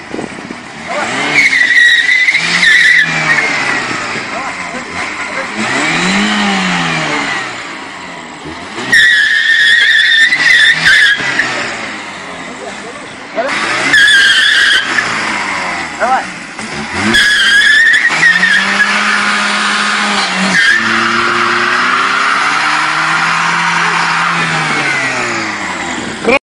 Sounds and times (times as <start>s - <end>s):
Skidding: 0.0s - 26.4s.